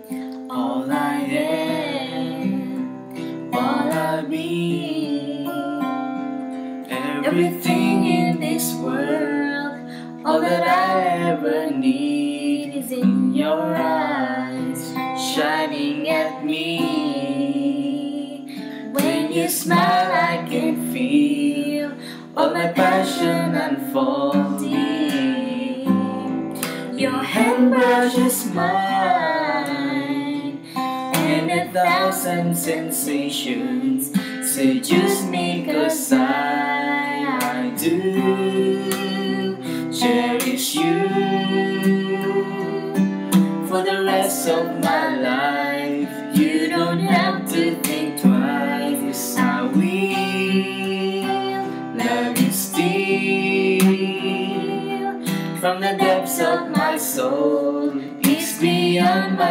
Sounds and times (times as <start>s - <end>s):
Music: 0.0s - 59.5s
Female singing: 0.5s - 2.8s, 3.5s - 5.9s, 6.9s - 59.5s
Male singing: 6.9s - 9.7s, 10.3s - 25.8s, 27.0s - 30.4s, 31.2s - 43.0s, 43.7s - 59.5s.